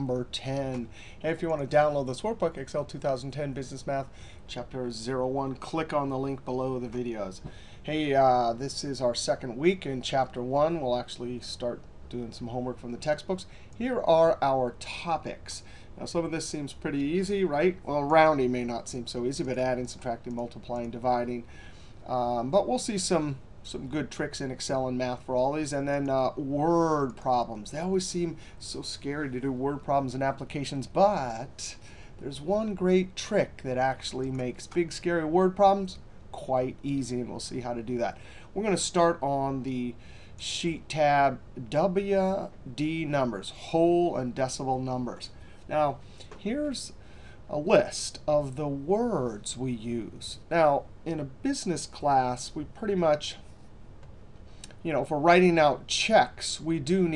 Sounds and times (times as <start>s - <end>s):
Speech: 0.0s - 21.5s, 22.1s - 53.5s, 54.8s - 57.1s.